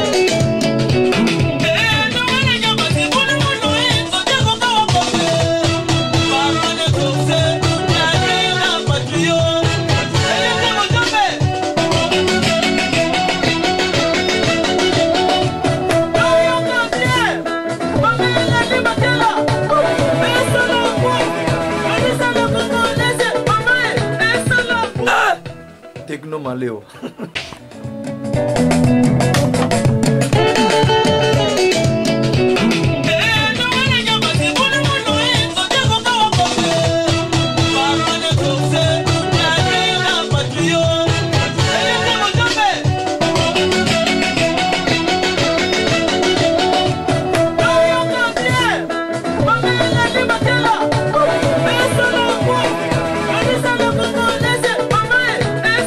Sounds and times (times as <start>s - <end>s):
Electronic music: 0.0s - 55.8s.